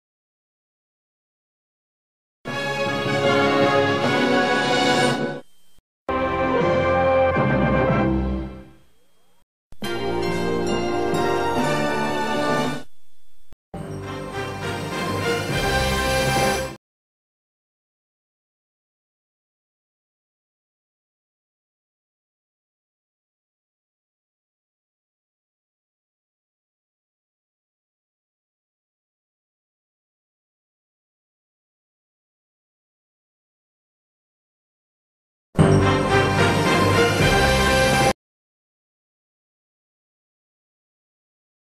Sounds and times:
Music: 0:02.5 - 0:05.5, 0:06.1 - 0:09.0, 0:09.8 - 0:12.9, 0:13.8 - 0:16.8, 0:35.6 - 0:38.2.

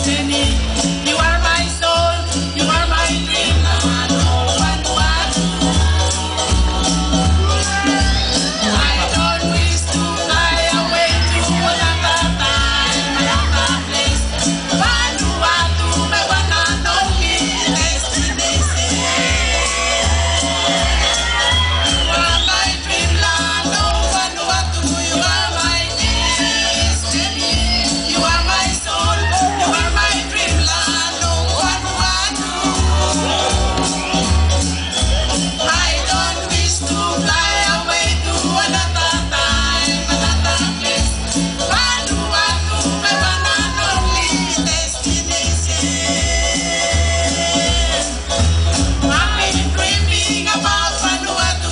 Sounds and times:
Folk music: 0:00.0 - 0:51.7.

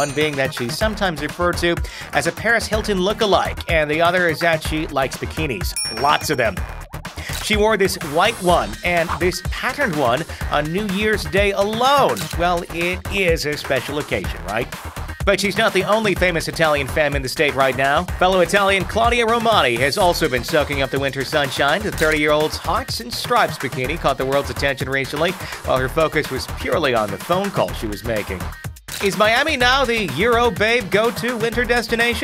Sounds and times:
Speech: 0:00.0 - 0:06.6, 0:07.3 - 0:28.4, 0:29.0 - 0:32.2
Music: 0:00.0 - 0:32.2.

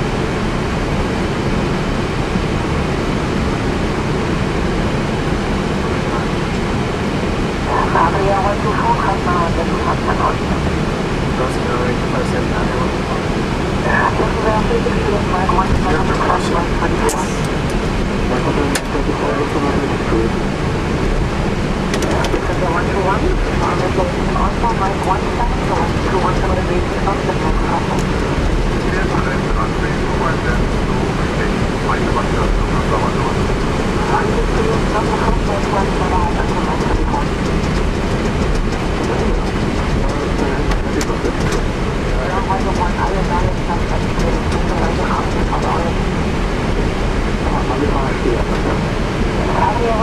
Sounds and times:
Speech: 0:05.8 - 0:06.6, 0:07.6 - 0:10.8, 0:11.4 - 0:17.6, 0:18.2 - 0:20.4, 0:22.0 - 0:28.2, 0:28.8 - 0:46.1, 0:47.4 - 0:50.0.

